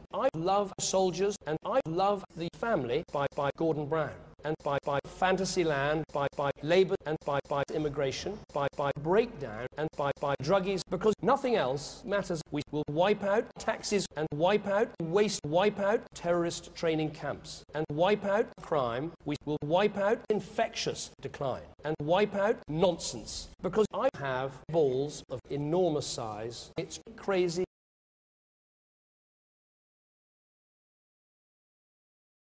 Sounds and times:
Male speech, man speaking: 0:00.0 - 0:27.7
Narration, monologue: 0:00.0 - 0:27.7.

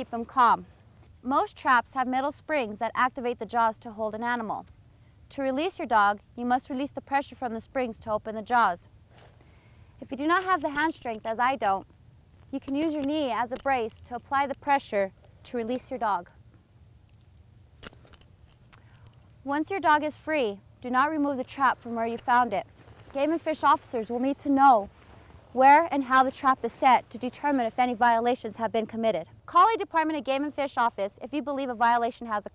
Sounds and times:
Speech: 0:01.2 - 0:04.7, 0:05.3 - 0:08.9, 0:10.0 - 0:11.8, 0:12.6 - 0:16.3, 0:19.5 - 0:24.9, 0:25.6 - 0:32.5.

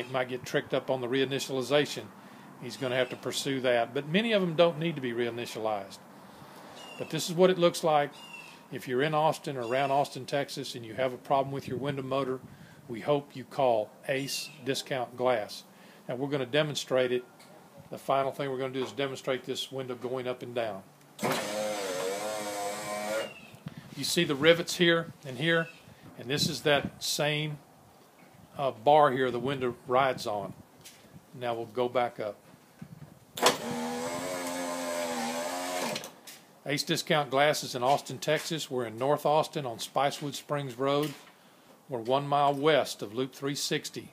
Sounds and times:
Speech: 0:00.0 - 0:06.0, 0:07.0 - 0:17.2, 0:17.9 - 0:20.9, 0:24.0 - 0:27.6, 0:28.6 - 0:30.6, 0:31.4 - 0:32.4, 0:36.6 - 0:41.2, 0:41.9 - 0:44.1.

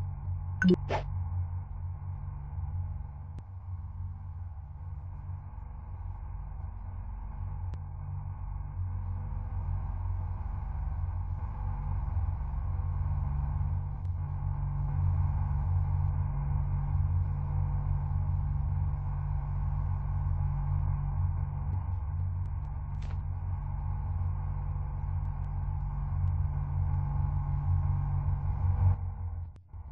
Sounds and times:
Car: 0:01.2 - 0:29.9.

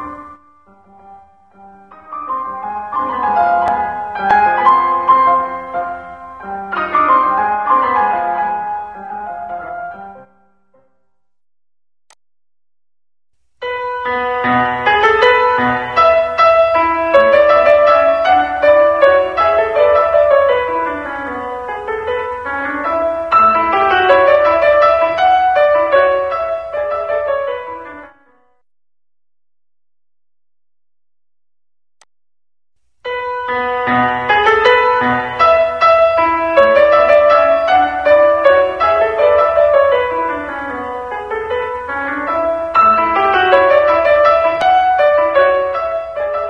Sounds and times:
Keyboard (musical): 0:00.0 - 0:11.1, 0:13.6 - 0:28.6, 0:33.1 - 0:46.4.

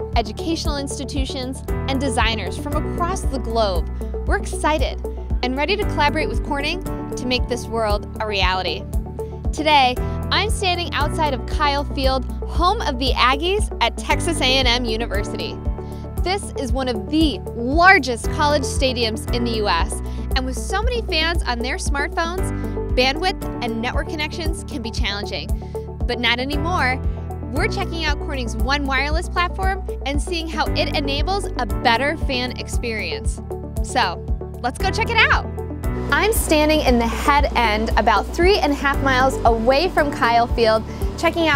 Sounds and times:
Music: 0:00.0 - 0:41.5
Speech: 0:00.2 - 0:08.8, 0:09.6 - 0:15.6, 0:16.2 - 0:25.5, 0:26.1 - 0:35.5, 0:36.1 - 0:41.5.

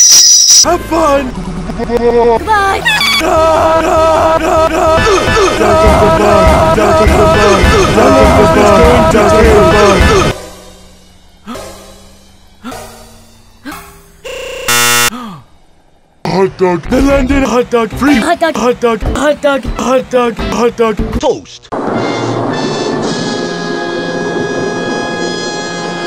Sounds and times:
Music: 0:05.1 - 0:14.2, 0:19.0 - 0:26.0.

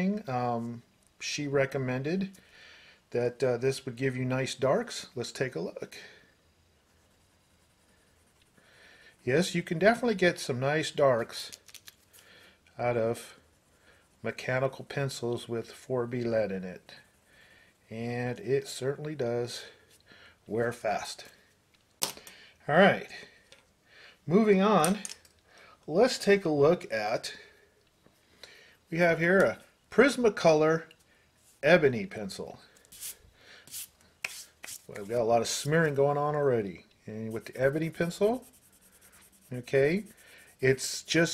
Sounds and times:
Speech: 0:00.0 - 0:02.4, 0:03.1 - 0:06.1, 0:09.2 - 0:11.6, 0:12.8 - 0:13.4, 0:14.2 - 0:17.0, 0:17.9 - 0:19.8, 0:20.5 - 0:21.4, 0:22.7 - 0:23.3, 0:24.3 - 0:25.2, 0:25.9 - 0:27.5, 0:28.9 - 0:30.9, 0:31.6 - 0:32.7, 0:34.9 - 0:38.5, 0:39.5 - 0:41.3
Inside, small room: 0:00.0 - 0:41.3.

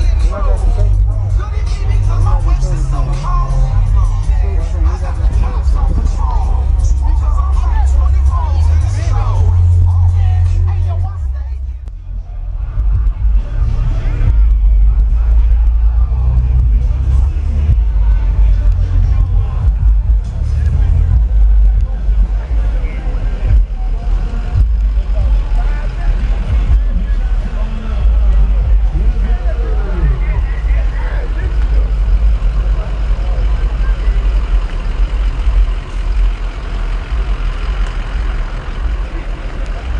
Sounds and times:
Music: 0:00.0 - 0:37.9
Speech: 0:00.0 - 0:39.9
Vehicle: 0:00.0 - 0:39.9.

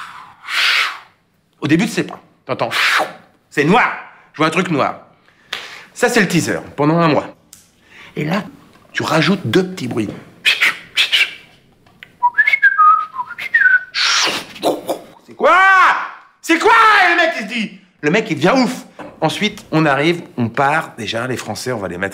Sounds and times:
Whistling: 0:00.0 - 0:01.1, 0:10.4 - 0:11.6, 0:12.2 - 0:14.5.

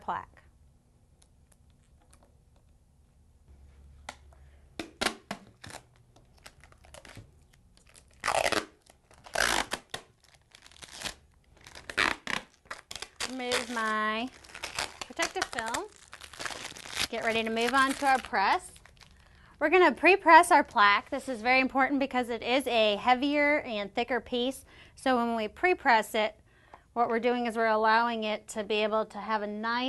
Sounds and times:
Speech: 0:00.0 - 0:00.4, 0:13.3 - 0:14.3, 0:15.1 - 0:15.9, 0:17.1 - 0:18.8, 0:19.6 - 0:26.4, 0:27.0 - 0:29.8
Tearing: 0:05.5 - 0:19.1.

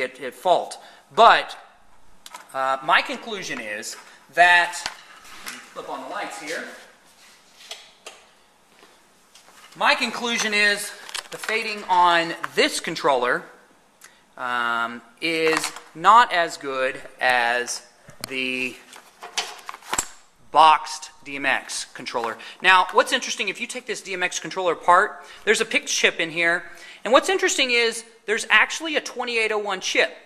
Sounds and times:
Speech: 0:00.0 - 0:01.6, 0:02.5 - 0:04.9, 0:05.5 - 0:06.9, 0:09.8 - 0:13.6, 0:14.4 - 0:18.9, 0:20.5 - 0:30.2.

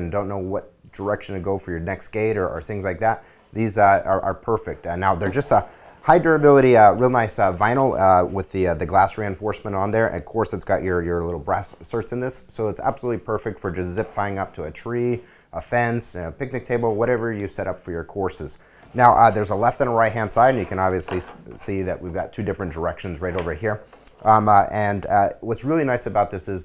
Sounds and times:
Speech: 0:00.0 - 0:26.6.

